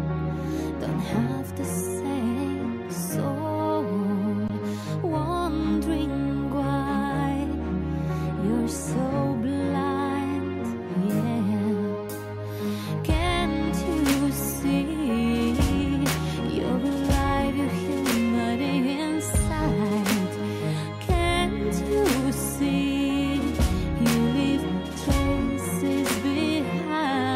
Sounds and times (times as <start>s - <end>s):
Music: 0.0s - 27.3s.